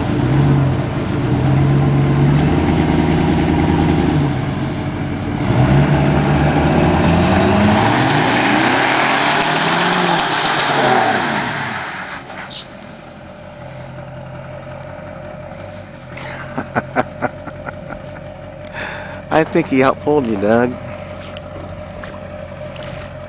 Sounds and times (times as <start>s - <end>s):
Car: 0.0s - 23.2s.